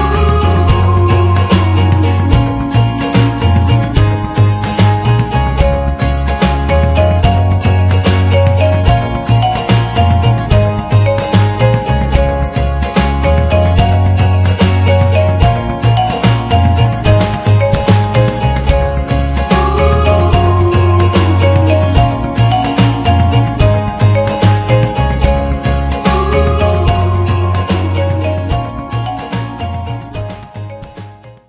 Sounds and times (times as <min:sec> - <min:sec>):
Music: 0:00.0 - 0:31.4.